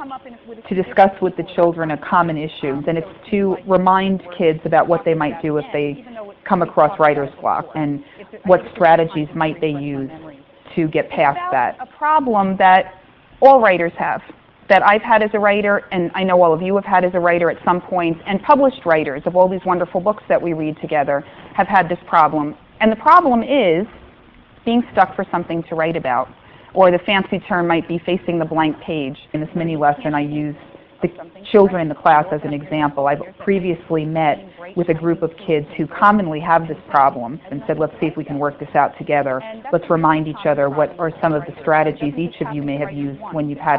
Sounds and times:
Speech: 0.0 - 24.0, 24.7 - 43.7.

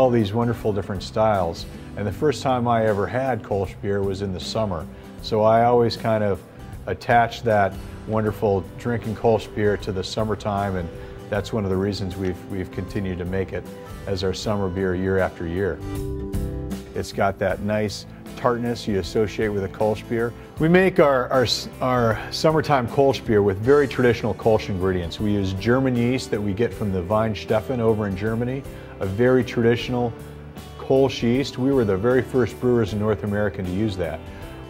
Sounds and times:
Speech: 0.0 - 15.8, 16.9 - 30.2, 30.8 - 34.2
Music: 0.0 - 34.6.

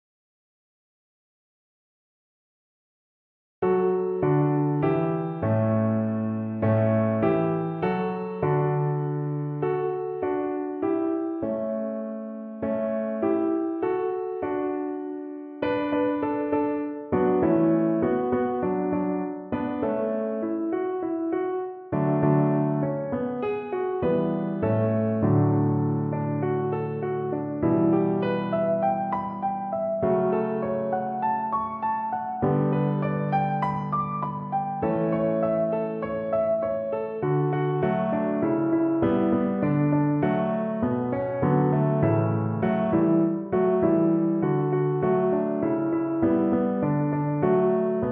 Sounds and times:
Music: 3.6 - 48.1.

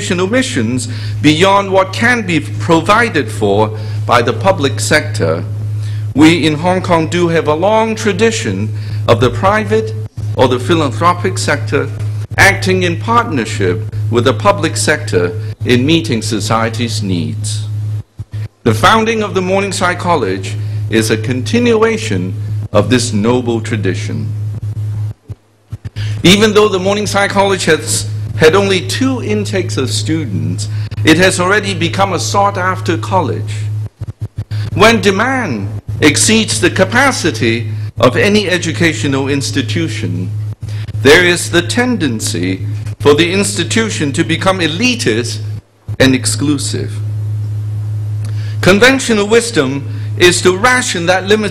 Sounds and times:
Narration, monologue: 0.0 - 51.5.

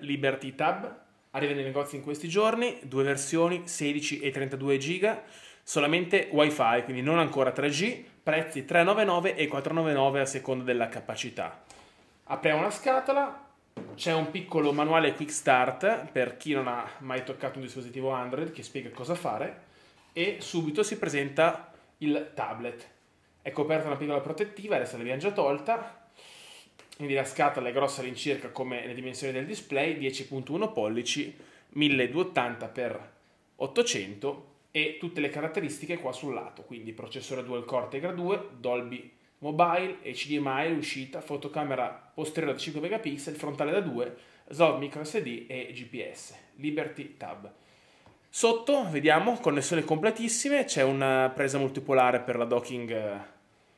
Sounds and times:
Speech: 0.0 - 11.6, 12.3 - 19.6, 20.2 - 26.0, 27.0 - 47.6, 48.3 - 53.4.

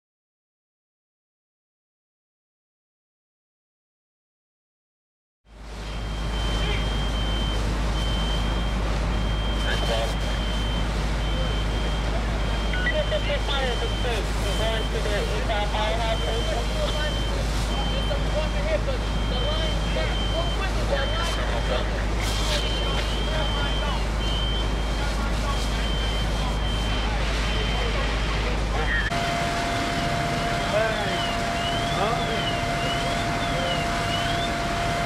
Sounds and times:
Crackle: 5.7 - 28.4
Speech: 6.5 - 7.0, 9.6 - 10.4, 11.3 - 29.2, 30.6 - 34.5.

